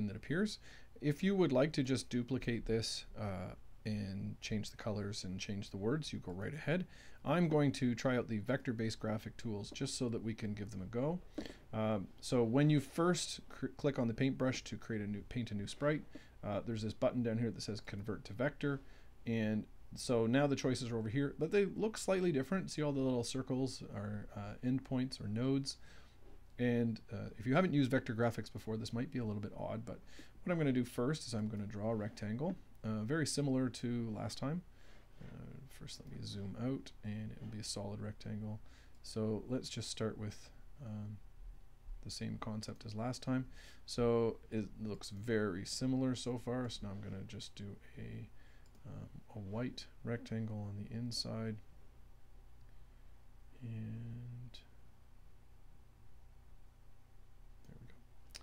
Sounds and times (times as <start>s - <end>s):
Speech: 0.0s - 25.8s, 26.6s - 41.3s, 42.0s - 51.7s, 53.5s - 54.8s.